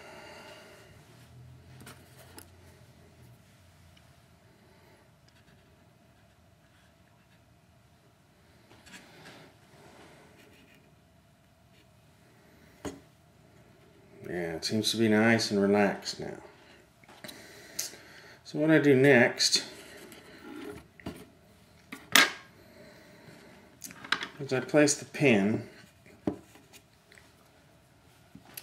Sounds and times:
Speech: 14.2s - 16.5s, 18.4s - 19.8s, 24.4s - 25.8s.

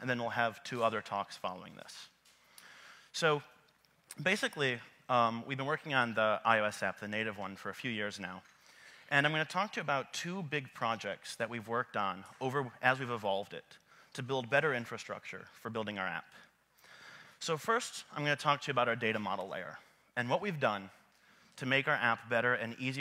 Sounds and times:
Speech: 0.0s - 2.2s, 3.2s - 8.4s, 9.1s - 16.5s, 17.4s - 21.0s, 21.6s - 23.0s.

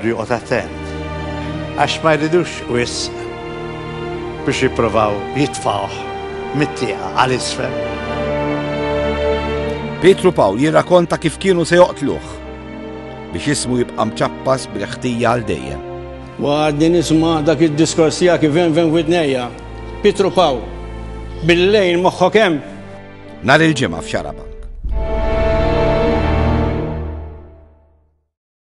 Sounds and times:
Music: 0.0s - 28.4s
Speech: 23.4s - 24.6s.

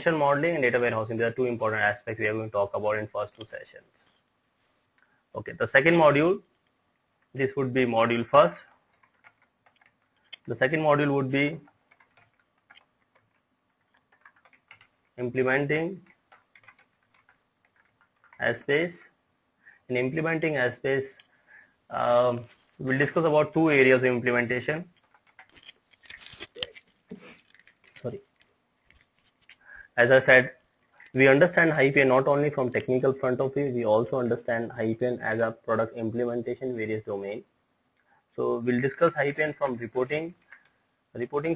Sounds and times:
Speech: 0.0s - 3.8s, 5.4s - 6.5s, 7.4s - 8.7s, 10.4s - 11.7s, 15.2s - 16.1s, 18.4s - 19.1s, 19.9s - 21.2s, 21.9s - 24.9s, 28.0s - 28.2s, 29.9s - 37.5s, 38.4s - 40.4s, 41.1s - 41.5s
Inside, small room: 0.0s - 41.5s.

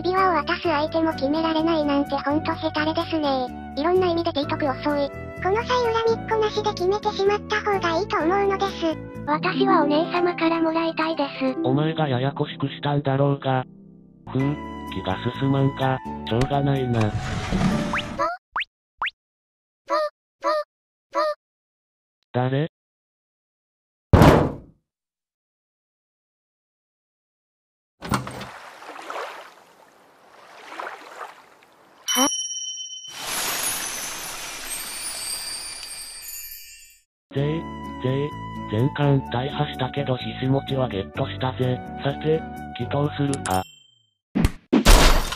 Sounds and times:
Speech: 0.0s - 13.7s, 14.3s - 17.2s, 22.3s - 22.8s, 37.3s - 43.6s.

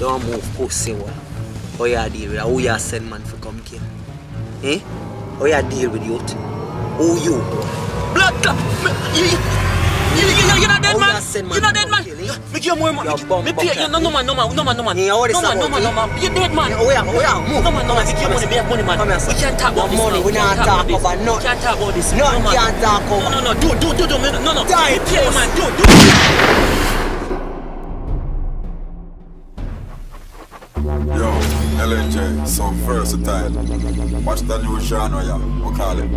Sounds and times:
Music: 0.0s - 36.1s.

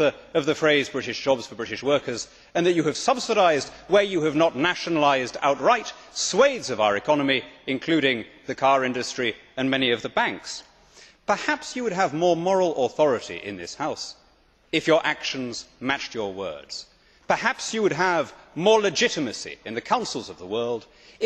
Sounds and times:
Male speech, man speaking: 0.0s - 10.7s, 11.3s - 14.2s, 14.8s - 21.2s
Narration, monologue: 0.0s - 21.2s.

